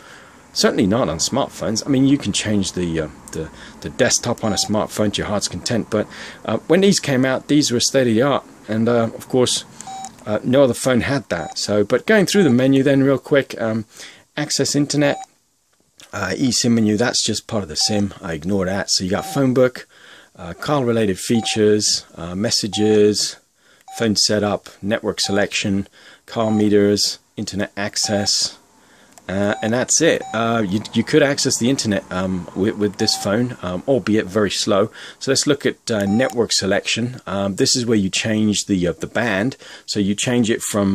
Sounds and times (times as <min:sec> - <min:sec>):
Speech: 0:00.6 - 0:15.3, 0:16.0 - 0:28.6, 0:29.3 - 0:40.9
Telephone dialing, DTMF: 0:09.8 - 0:10.1, 0:19.2 - 0:19.4, 0:28.0 - 0:28.3, 0:33.0 - 0:33.3, 0:36.1 - 0:36.4.